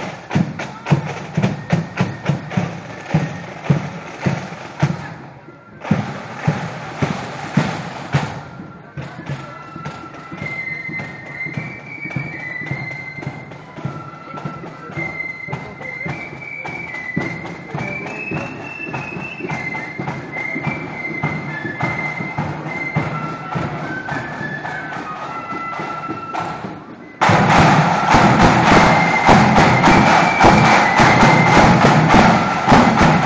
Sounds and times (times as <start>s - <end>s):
Music: 0.0s - 33.2s
Speech: 8.5s - 18.8s.